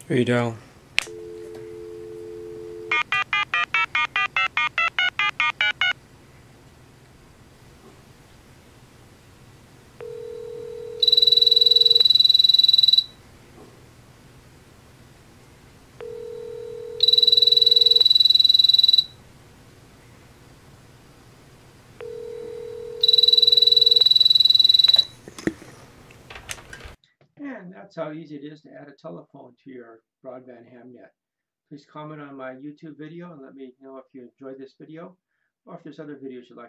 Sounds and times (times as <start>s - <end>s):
Speech: 0.0s - 0.6s, 27.4s - 36.6s
Telephone: 1.0s - 6.0s, 10.0s - 13.2s, 16.0s - 19.2s, 22.0s - 25.2s.